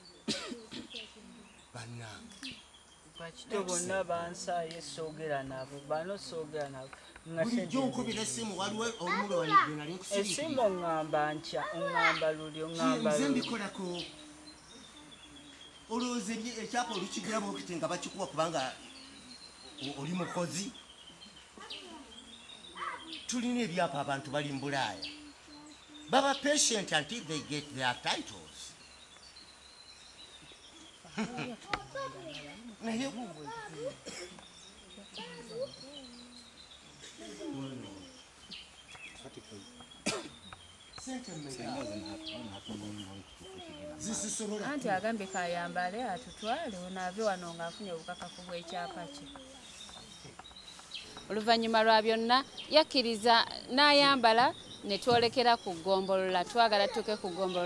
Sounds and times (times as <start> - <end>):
Environmental noise: 0.0 - 57.6.